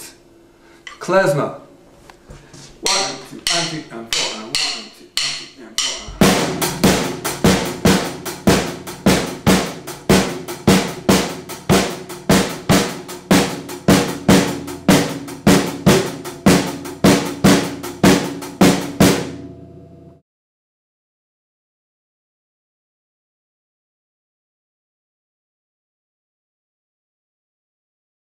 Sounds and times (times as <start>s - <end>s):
Drum: 2.9s - 19.5s.